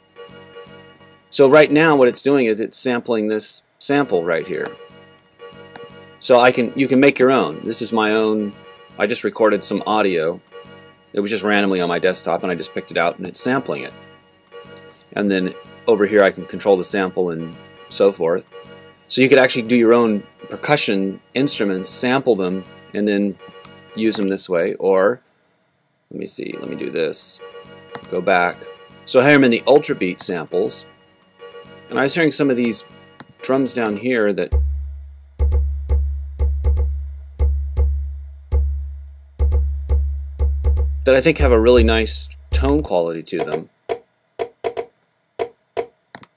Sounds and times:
Speech: 1.4s - 4.8s, 6.2s - 10.4s, 11.2s - 13.9s, 15.2s - 18.4s, 19.1s - 23.4s, 24.0s - 25.2s, 26.1s - 27.4s, 28.1s - 30.9s, 31.9s - 34.6s, 41.1s - 43.7s.

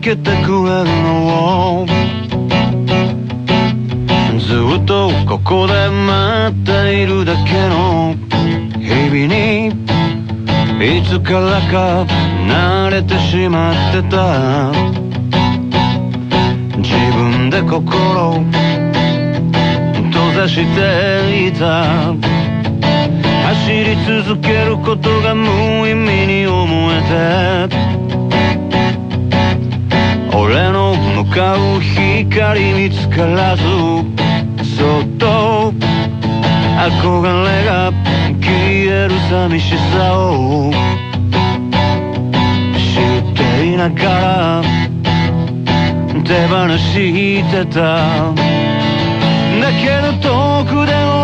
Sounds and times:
Music: 0.0s - 51.2s.

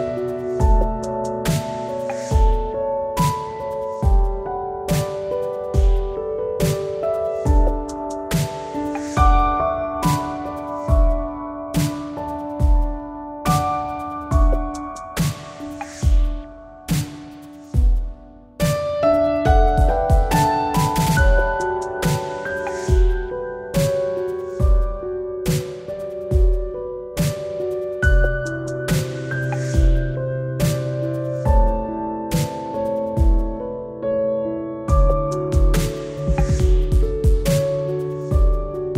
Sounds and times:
Music: 0.0s - 38.9s.

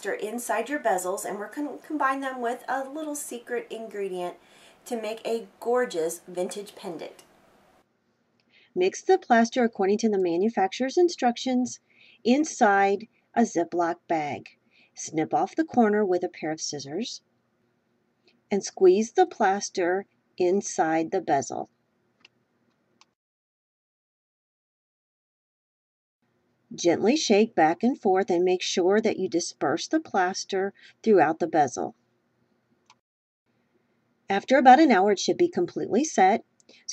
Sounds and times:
Speech: 0.0s - 7.2s, 8.8s - 17.2s, 18.5s - 21.7s, 26.8s - 32.0s, 34.3s - 36.9s.

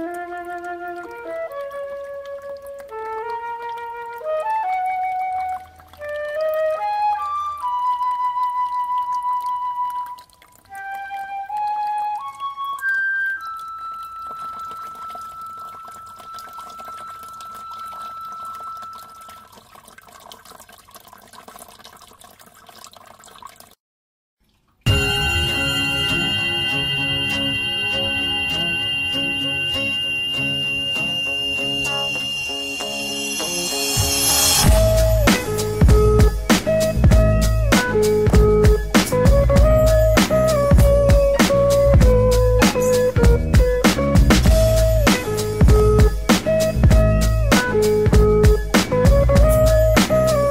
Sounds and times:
Music: 0.0s - 16.0s, 24.9s - 50.5s.

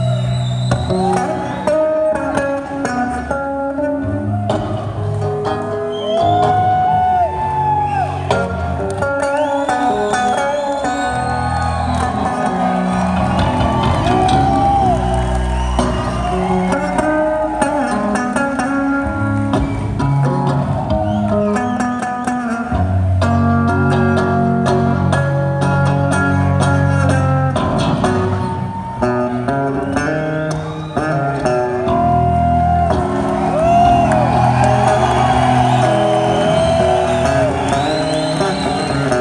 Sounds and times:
Music: 0.0s - 39.2s.

